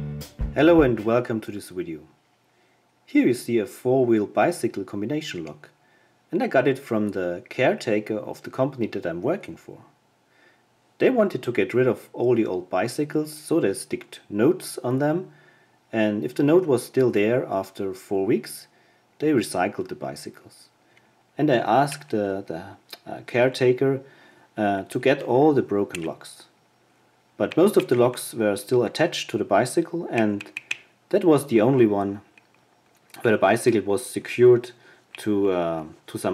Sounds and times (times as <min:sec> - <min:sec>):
Speech: 0:00.6 - 0:02.2, 0:03.1 - 0:10.0, 0:11.0 - 0:20.8, 0:21.4 - 0:26.6, 0:27.4 - 0:30.5, 0:31.1 - 0:32.3, 0:33.1 - 0:36.3.